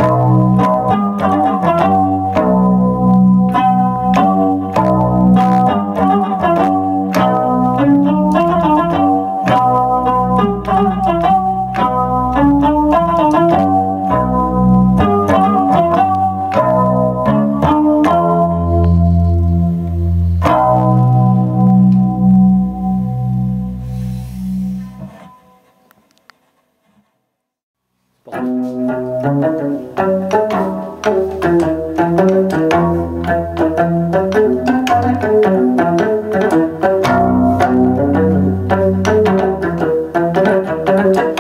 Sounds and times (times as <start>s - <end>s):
Plucked string instrument: 0.0s - 26.2s, 28.3s - 41.4s.